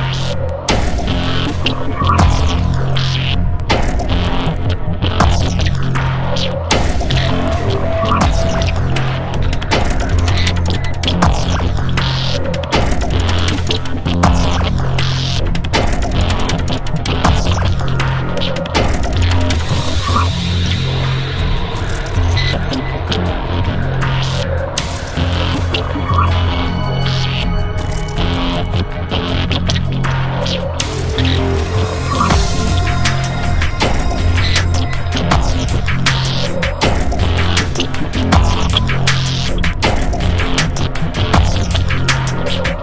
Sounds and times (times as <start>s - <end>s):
Music: 0.0s - 42.8s
Throbbing: 0.0s - 42.8s.